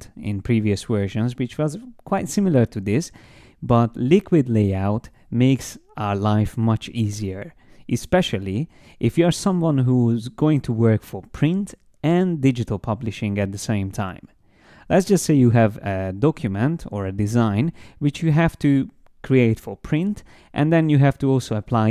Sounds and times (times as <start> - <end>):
Speech: 0.0 - 21.9.